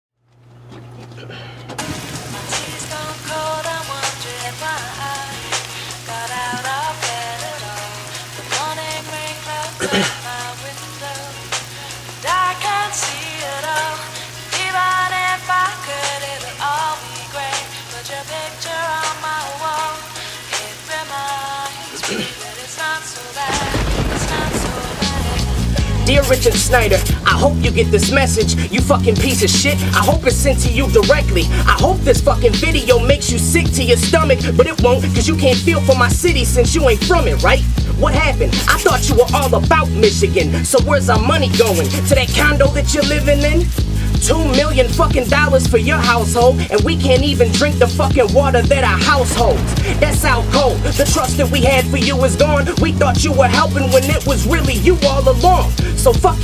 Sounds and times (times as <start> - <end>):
Music: 0.2 - 56.4.